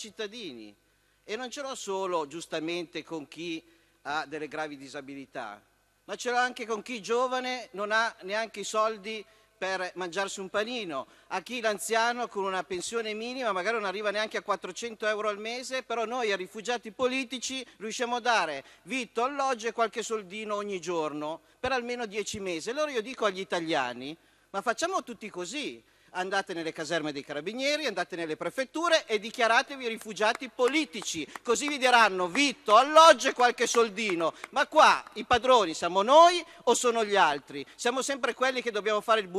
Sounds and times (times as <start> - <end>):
Speech: 0.0 - 39.3.